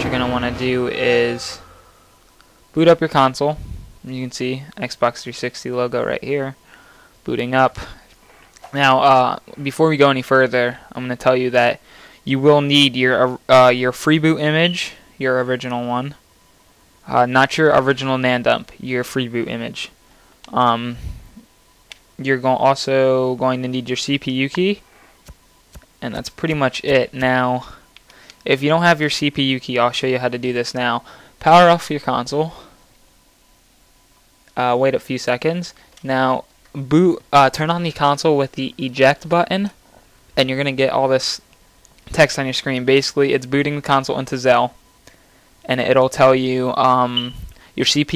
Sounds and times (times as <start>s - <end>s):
Speech: 0.0s - 1.8s, 2.8s - 6.6s, 7.3s - 8.0s, 8.6s - 16.2s, 17.1s - 21.0s, 22.2s - 24.8s, 26.0s - 27.8s, 28.4s - 32.7s, 34.6s - 39.8s, 40.4s - 41.4s, 42.1s - 44.8s, 45.7s - 48.1s.